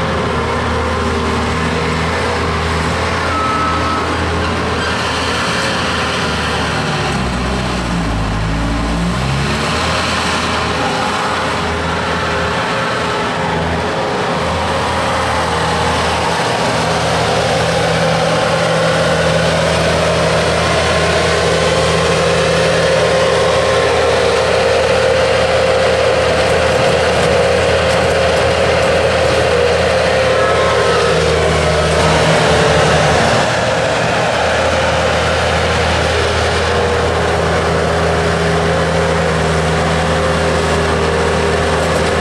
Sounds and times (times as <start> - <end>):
Truck: 0.0 - 42.2.